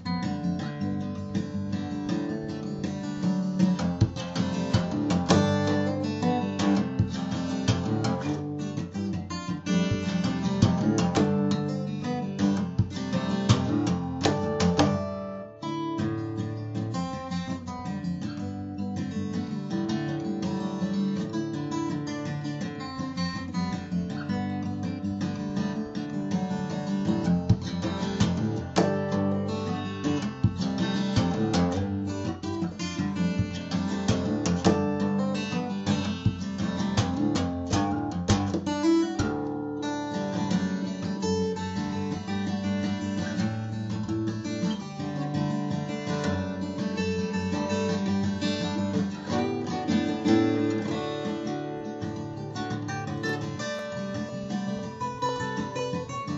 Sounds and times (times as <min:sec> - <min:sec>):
Music: 0:00.0 - 0:56.3.